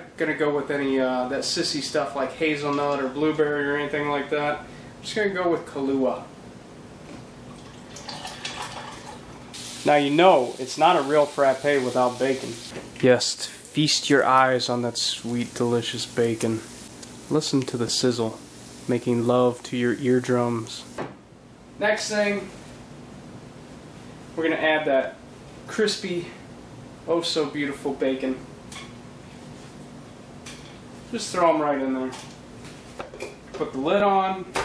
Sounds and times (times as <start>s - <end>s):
Speech: 0.0s - 6.3s, 9.8s - 16.7s, 17.3s - 21.0s, 21.8s - 22.6s, 24.4s - 26.4s, 27.1s - 28.4s, 31.1s - 32.3s, 33.6s - 34.6s.